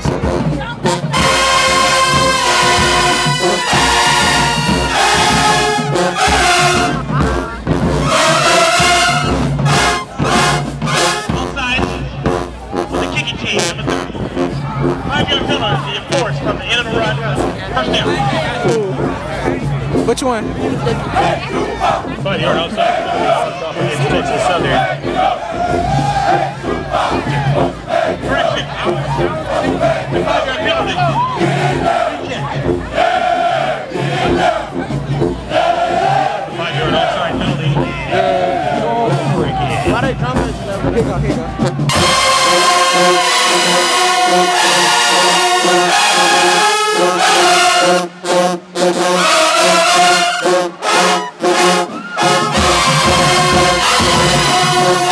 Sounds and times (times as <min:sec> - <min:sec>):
Music: 0:00.0 - 0:55.1
Speech: 0:13.0 - 0:14.1, 0:15.1 - 0:25.4, 0:31.9 - 0:33.2, 0:36.5 - 0:41.7.